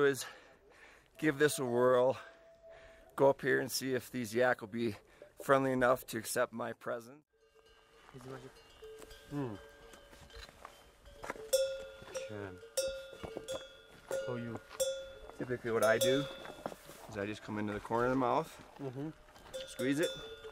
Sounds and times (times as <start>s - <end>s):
Speech: 3.2s - 7.2s, 8.2s - 8.6s, 15.4s - 16.3s, 17.1s - 20.2s.